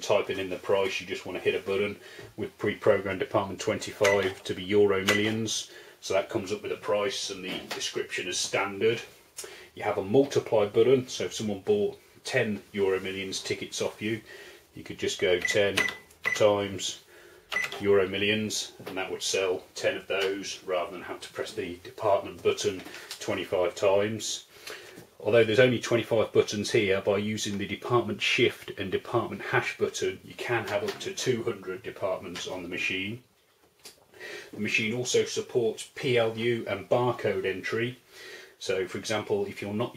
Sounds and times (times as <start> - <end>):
Speech: 0.0 - 9.2, 9.8 - 17.0, 17.7 - 24.5, 25.2 - 33.3, 34.5 - 38.0, 38.6 - 39.9.